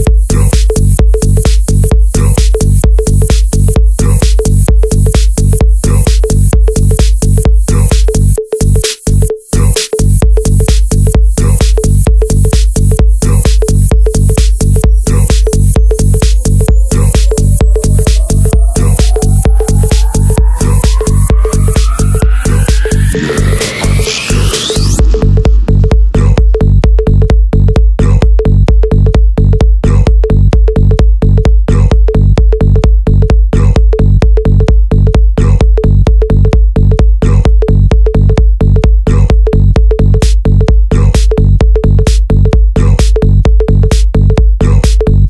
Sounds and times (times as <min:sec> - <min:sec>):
House music: 0:00.0 - 0:37.6, 0:38.2 - 0:45.2
Hip hop music: 0:07.0 - 0:08.2, 0:09.6 - 0:26.7
Pop music: 0:15.0 - 0:26.6.